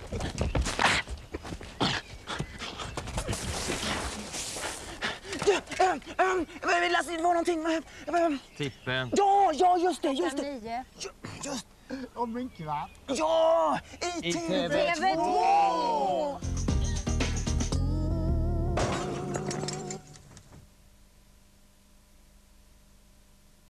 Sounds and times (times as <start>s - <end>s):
Music: 16.4s - 20.3s.